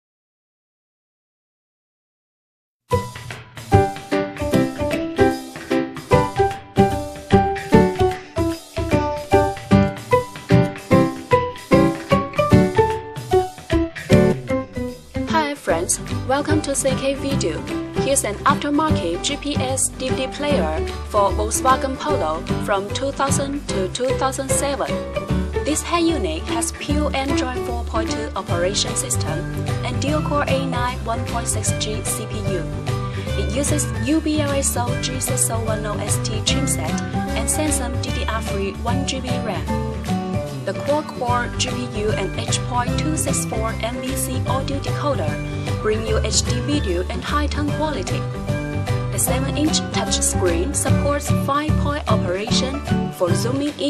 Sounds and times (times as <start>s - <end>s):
Background music: 2.9s - 53.8s
Speech: 15.3s - 25.0s, 25.6s - 39.7s, 40.7s - 48.3s, 49.1s - 53.8s.